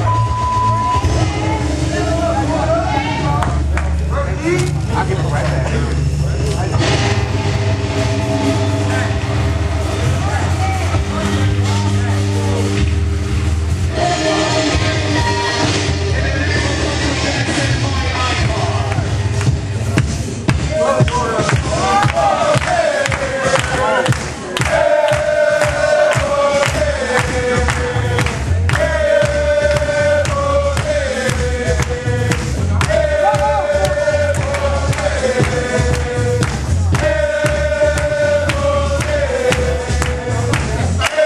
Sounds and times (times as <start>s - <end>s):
Music: 0.0s - 41.2s.